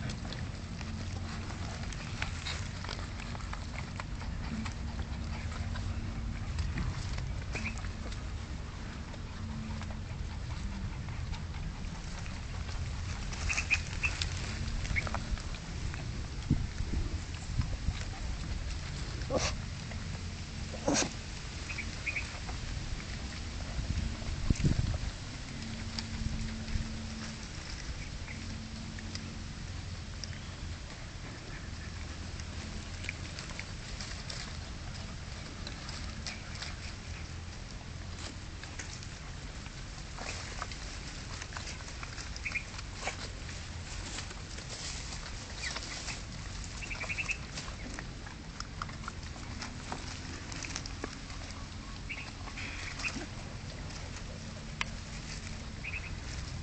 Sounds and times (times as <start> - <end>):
Animal: 0.0 - 56.6.